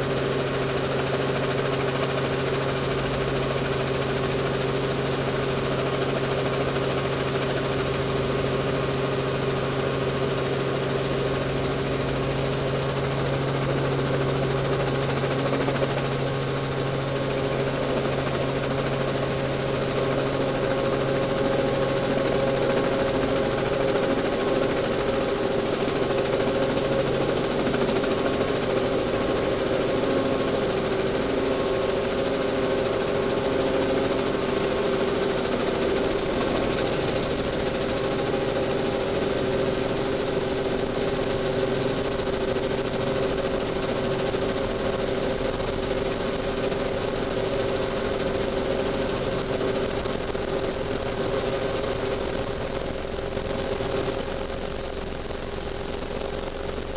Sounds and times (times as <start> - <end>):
Helicopter: 0.0 - 56.9.